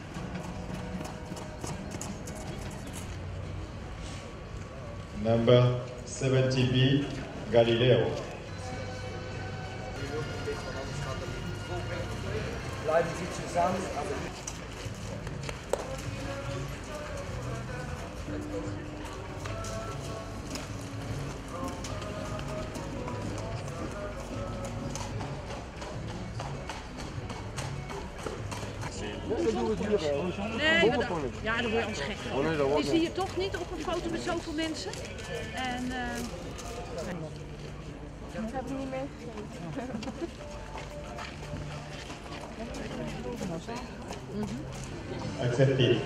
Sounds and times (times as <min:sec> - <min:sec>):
Music: 0:00.0 - 0:03.8, 0:05.5 - 0:46.0
Clip-clop: 0:00.0 - 0:06.1, 0:06.7 - 0:09.3, 0:10.0 - 0:46.0.